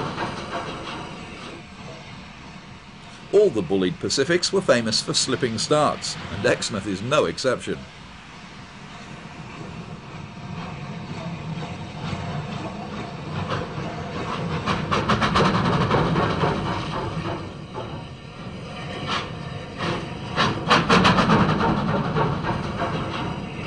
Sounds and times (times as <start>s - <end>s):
Speech: 3.3s - 7.9s.